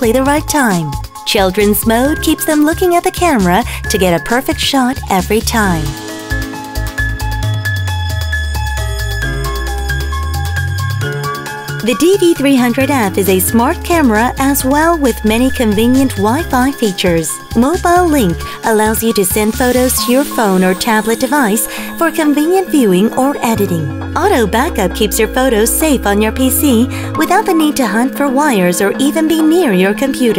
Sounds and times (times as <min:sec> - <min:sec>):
Speech: 0:00.0 - 0:06.0, 0:11.8 - 0:30.3
Music: 0:00.0 - 0:30.3.